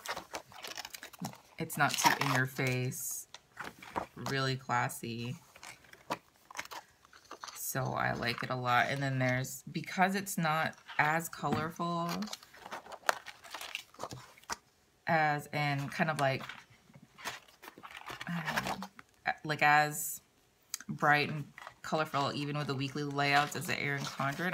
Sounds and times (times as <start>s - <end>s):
Inside, small room: 0.0s - 24.5s
Speech: 1.6s - 3.3s, 4.2s - 5.4s, 7.6s - 12.3s, 15.1s - 16.5s, 18.3s - 24.5s.